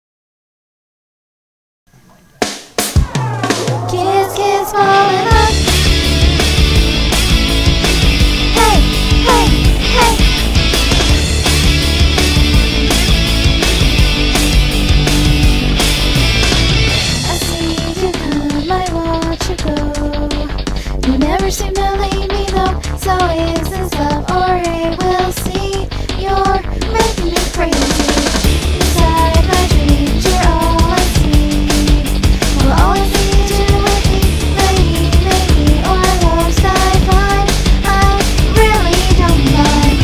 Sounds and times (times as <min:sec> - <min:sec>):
Music: 0:01.9 - 0:40.0
Female singing: 0:03.9 - 0:05.6, 0:08.6 - 0:10.2, 0:17.3 - 0:20.5, 0:21.1 - 0:40.0.